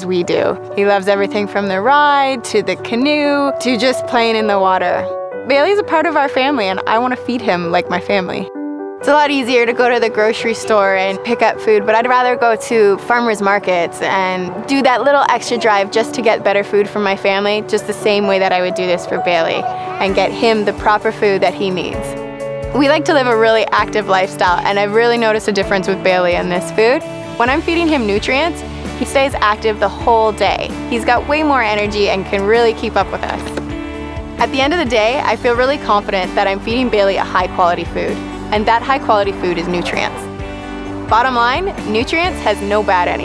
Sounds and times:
Speech: 0:00.0 - 0:22.1, 0:22.8 - 0:33.6, 0:34.4 - 0:40.3, 0:41.1 - 0:43.2
Music: 0:00.0 - 0:43.2.

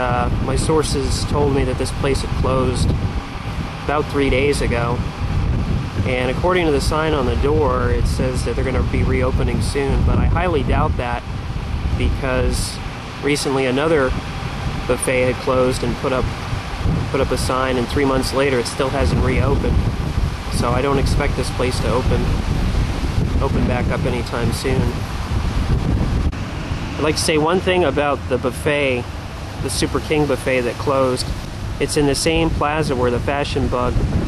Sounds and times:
Speech: 0:00.0 - 0:02.9, 0:03.8 - 0:05.0, 0:06.0 - 0:11.2, 0:12.0 - 0:14.2, 0:14.9 - 0:16.3, 0:17.1 - 0:19.8, 0:20.5 - 0:22.4, 0:23.4 - 0:25.0, 0:27.0 - 0:34.0.

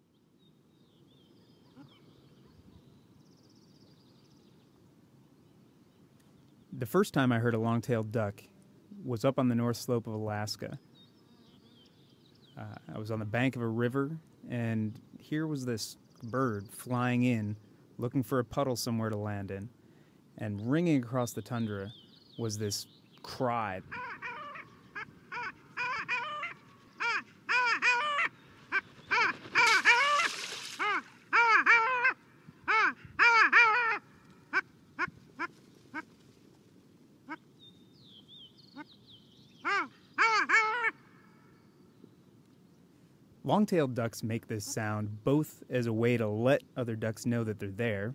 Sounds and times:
Quack: 0:23.9 - 0:36.1.

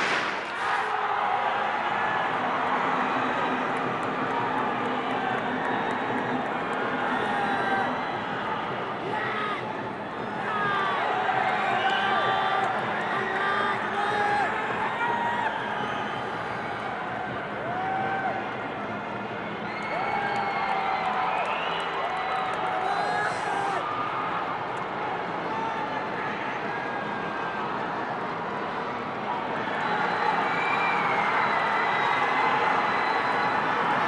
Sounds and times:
Outside, urban or manmade: 0:00.0 - 0:34.0.

